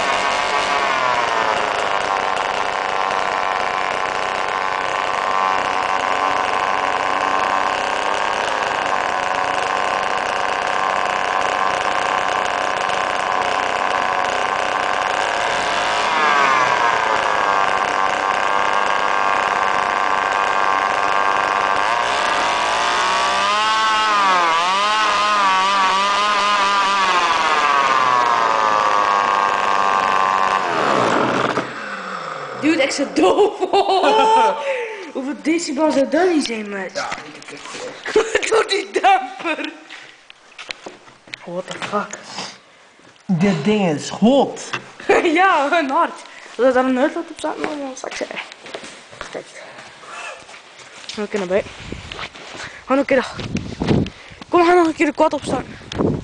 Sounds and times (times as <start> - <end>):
Chainsaw: 0.0 - 42.7, 43.4 - 56.2.